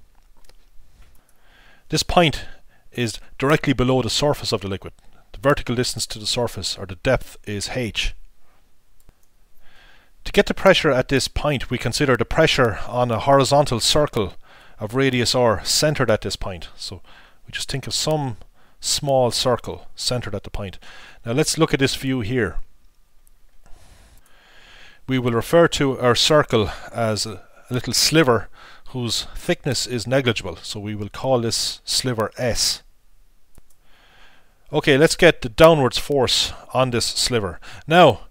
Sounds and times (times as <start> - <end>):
Speech: 1.9 - 8.2, 10.2 - 22.7, 25.1 - 32.9, 34.7 - 38.3.